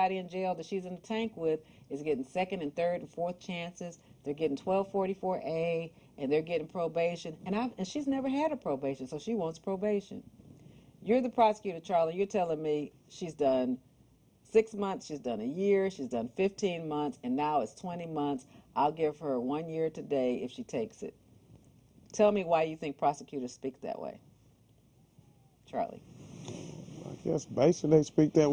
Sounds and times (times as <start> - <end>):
Female speech, woman speaking: 0.0 - 10.2, 11.0 - 13.8, 14.5 - 21.1, 22.2 - 24.2, 25.7 - 26.0.